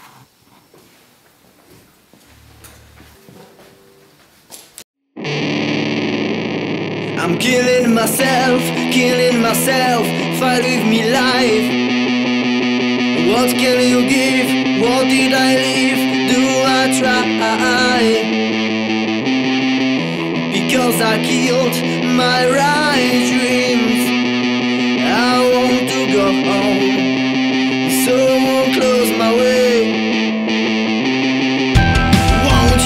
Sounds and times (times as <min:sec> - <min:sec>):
Music: 0:05.1 - 0:32.8.